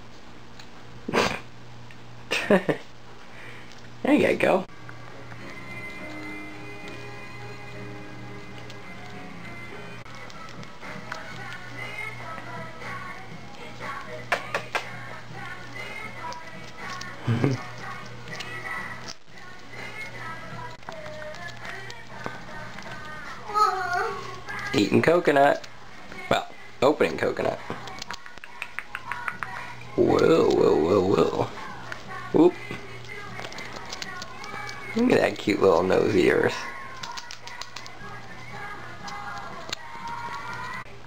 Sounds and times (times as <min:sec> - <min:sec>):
Music: 0:04.7 - 0:41.0.